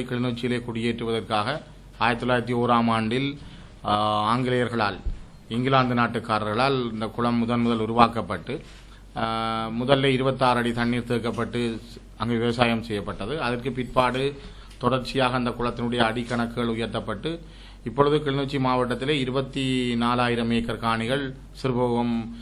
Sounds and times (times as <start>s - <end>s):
Speech: 0.0s - 8.6s, 9.2s - 22.4s.